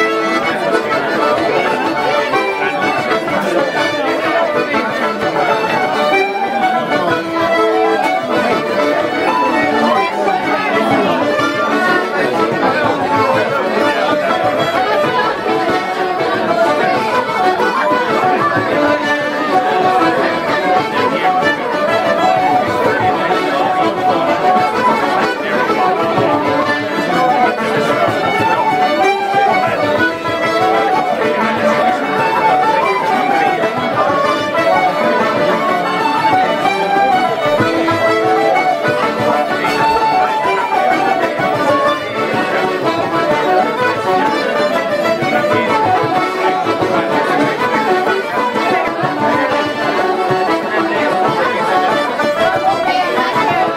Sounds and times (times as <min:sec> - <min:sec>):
Speech: 0:00.0 - 0:53.7
Traditional music: 0:00.0 - 0:53.7.